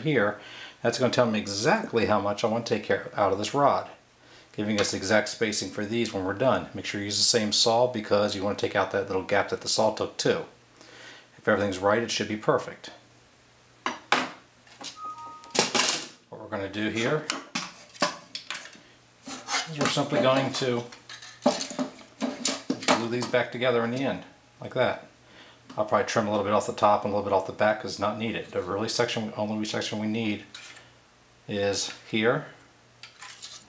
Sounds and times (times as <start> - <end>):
Speech: 0.0 - 4.0, 4.6 - 10.6, 11.4 - 13.0, 16.3 - 17.3, 19.6 - 21.0, 22.8 - 25.1, 25.7 - 30.5, 31.5 - 32.6.